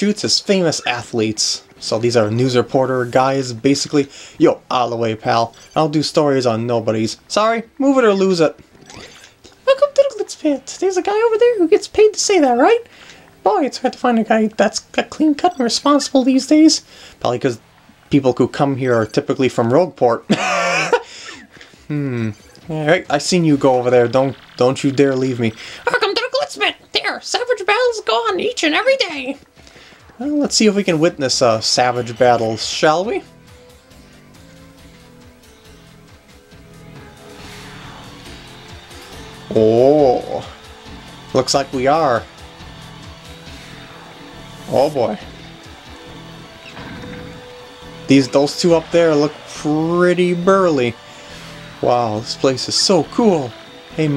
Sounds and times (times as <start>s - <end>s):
Speech: 0.0s - 8.6s, 9.6s - 17.6s, 18.2s - 20.3s, 21.9s - 29.4s, 30.2s - 33.3s, 39.5s - 40.6s, 41.4s - 42.3s, 44.7s - 45.3s, 48.1s - 51.0s, 51.8s - 54.1s.